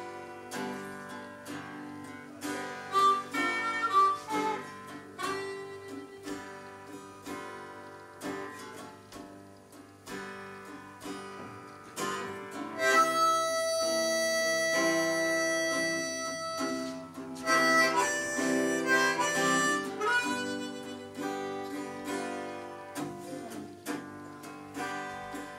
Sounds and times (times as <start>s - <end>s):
Guitar: 0.0s - 25.5s
Harmonica: 2.4s - 6.8s, 12.8s - 22.2s.